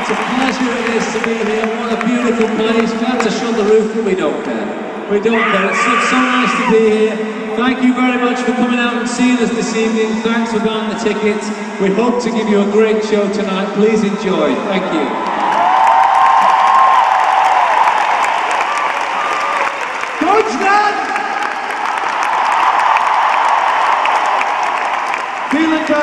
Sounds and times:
Narration, monologue: 0.0s - 15.1s
Male speech, man speaking: 0.0s - 15.2s, 20.2s - 21.1s, 25.5s - 26.0s.

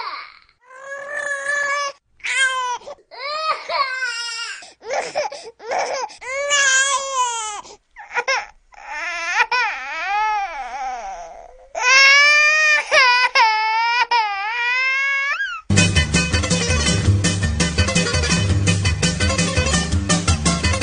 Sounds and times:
Crying, sobbing: 0.0s - 15.7s
Music: 15.7s - 20.8s.

